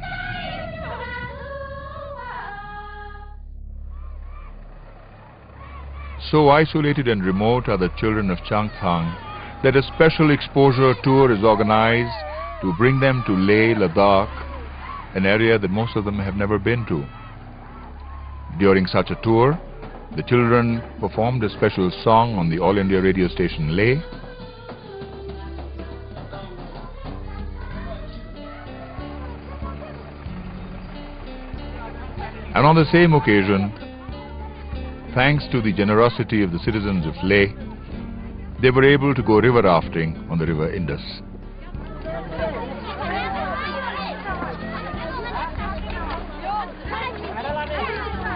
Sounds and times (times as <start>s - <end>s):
Music: 0.0s - 6.2s, 6.8s - 48.3s
Speech: 6.2s - 14.4s, 20.2s - 24.1s, 35.1s - 48.3s.